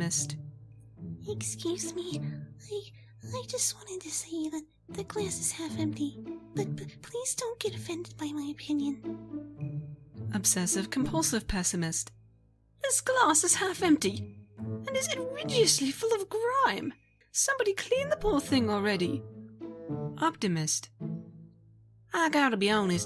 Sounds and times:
Speech: 0.0s - 0.4s, 1.3s - 9.0s, 10.3s - 12.1s, 12.8s - 14.2s, 14.9s - 19.2s, 20.2s - 20.9s, 22.1s - 23.0s
Music: 0.0s - 23.0s.

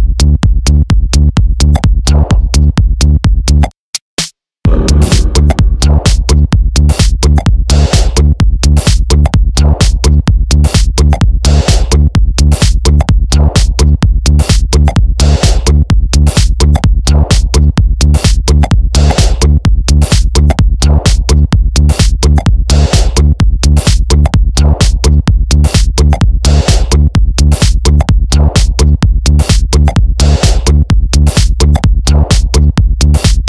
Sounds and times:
Techno: 0.1s - 3.6s, 4.7s - 33.4s.

